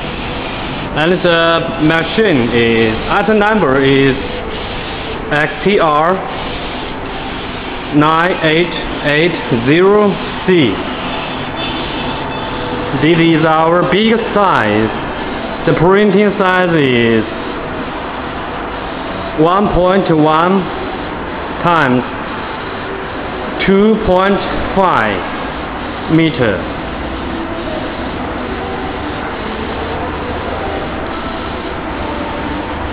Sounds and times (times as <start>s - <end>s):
Printer: 0.0s - 32.9s
Speech: 1.0s - 4.2s, 5.3s - 6.2s, 8.0s - 10.8s, 13.0s - 15.0s, 15.7s - 17.3s, 19.4s - 20.7s, 21.6s - 22.1s, 23.6s - 25.3s, 26.1s - 26.7s.